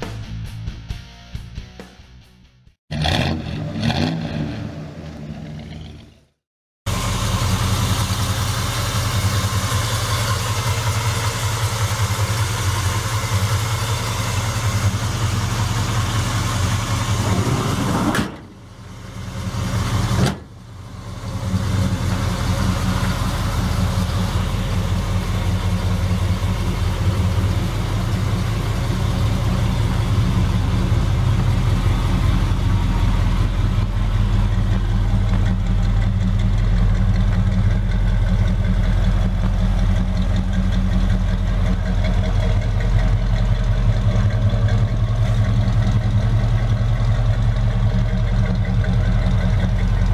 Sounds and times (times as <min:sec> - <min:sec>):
Car: 0:02.9 - 0:50.1.